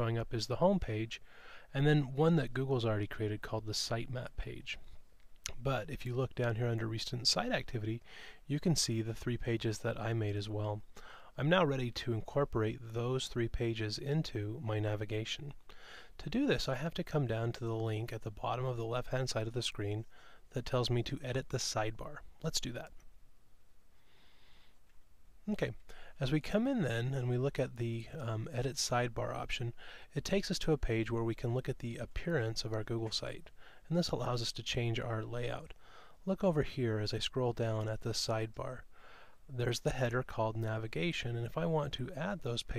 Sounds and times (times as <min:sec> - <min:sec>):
Speech: 0:00.0 - 0:04.9, 0:05.5 - 0:10.8, 0:11.4 - 0:15.6, 0:16.2 - 0:23.0, 0:25.4 - 0:38.9, 0:39.5 - 0:42.7.